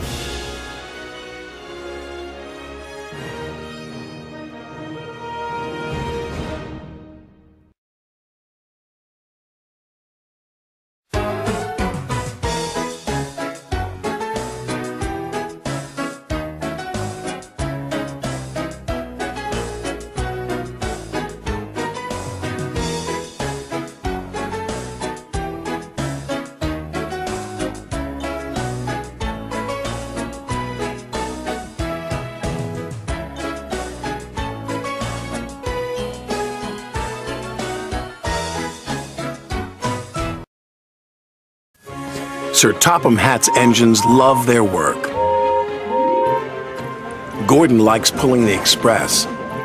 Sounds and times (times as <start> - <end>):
Music: 0.0 - 7.8, 11.1 - 40.5, 41.8 - 49.6.